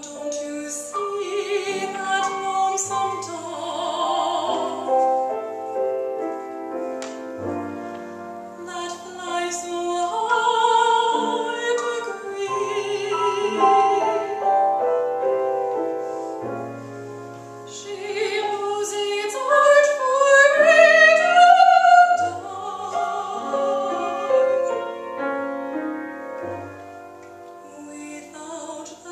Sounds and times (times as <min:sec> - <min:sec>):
Music: 0:00.0 - 0:29.1.